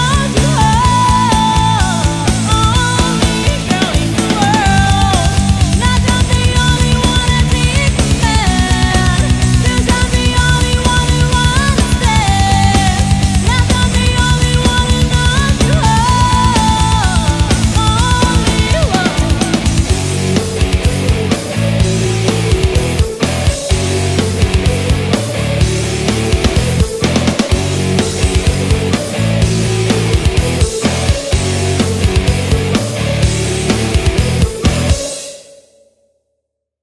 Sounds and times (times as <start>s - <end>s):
Musical instrument: 0.0s - 35.2s
Progressive rock: 0.0s - 35.5s.